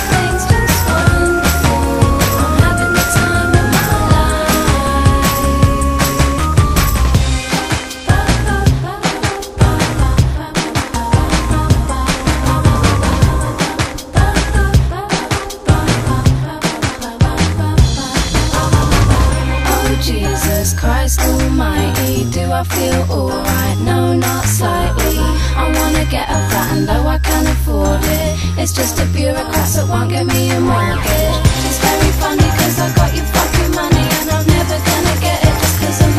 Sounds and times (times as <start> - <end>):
Music: 0.0 - 36.1.